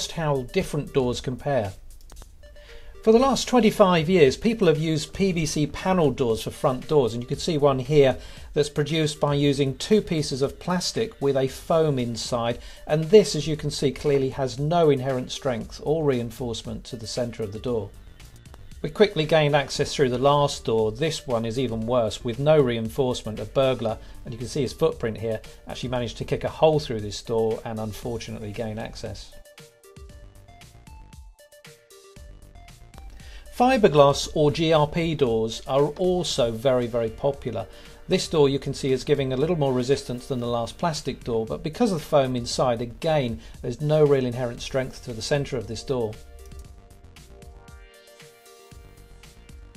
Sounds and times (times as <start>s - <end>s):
Speech: 0.0s - 1.8s, 3.0s - 18.0s, 18.8s - 29.4s, 33.6s - 46.2s
Music: 0.0s - 49.7s.